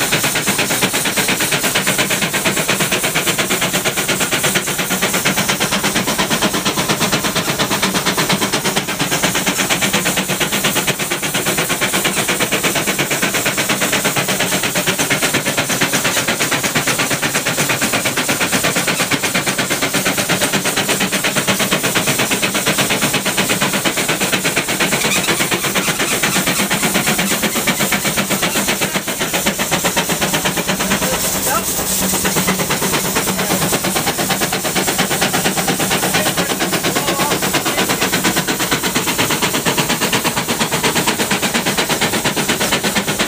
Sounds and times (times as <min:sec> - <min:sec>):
Speech: 0:31.0 - 0:31.8, 0:36.0 - 0:38.0.